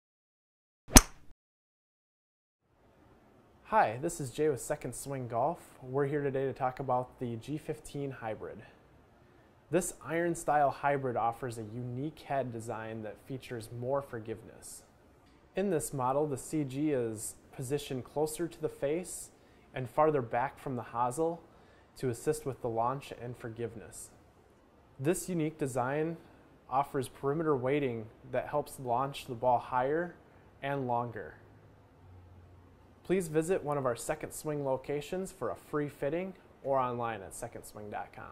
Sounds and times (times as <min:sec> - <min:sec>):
Speech: 0:03.7 - 0:08.8, 0:09.7 - 0:14.9, 0:15.6 - 0:21.4, 0:22.0 - 0:24.2, 0:25.0 - 0:31.4, 0:33.0 - 0:38.3.